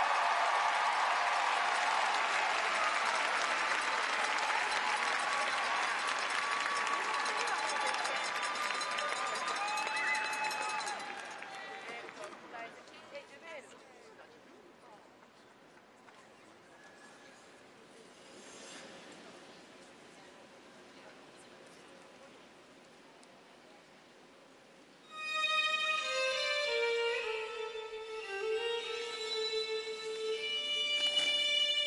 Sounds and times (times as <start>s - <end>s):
Music: 25.1s - 31.8s.